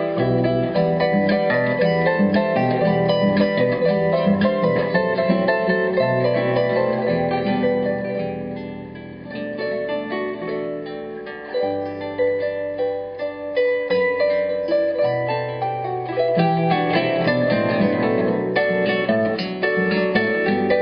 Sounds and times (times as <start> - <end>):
Harp: 0.0 - 20.8
Plucked string instrument: 0.0 - 20.8.